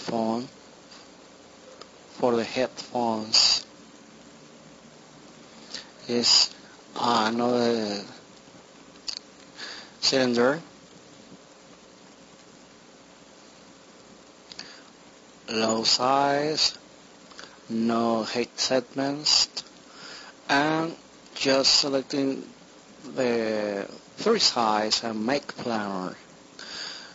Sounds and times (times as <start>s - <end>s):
Speech: 0.0s - 0.5s, 2.2s - 3.7s, 6.0s - 8.2s, 10.0s - 10.7s, 15.5s - 16.8s, 17.7s - 19.6s, 20.5s - 26.2s
Inside, small room: 0.0s - 27.1s.